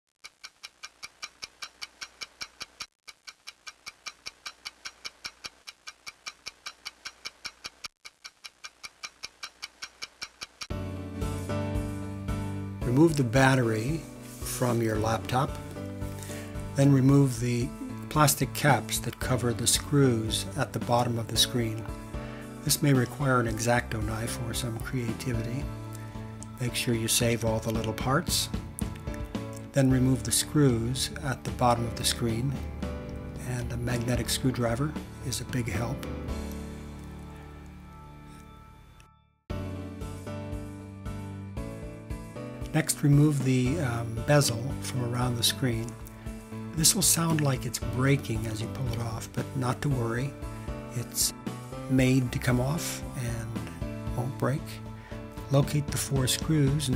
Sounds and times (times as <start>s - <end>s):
Tick-tock: 0.2s - 10.7s.